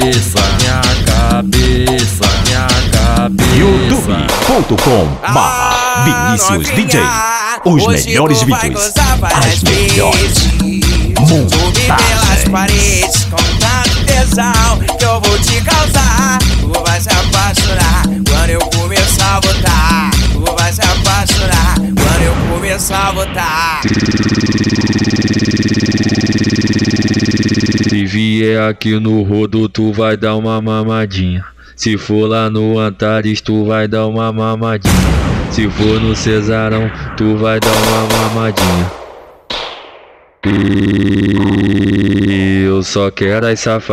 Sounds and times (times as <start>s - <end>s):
Sampler: 21.2s - 28.4s, 37.6s - 42.4s.